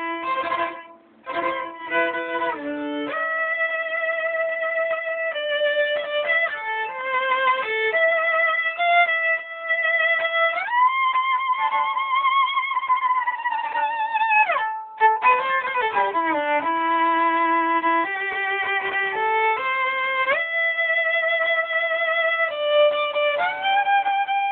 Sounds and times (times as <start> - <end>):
Violin, fiddle: 0.0 - 24.5.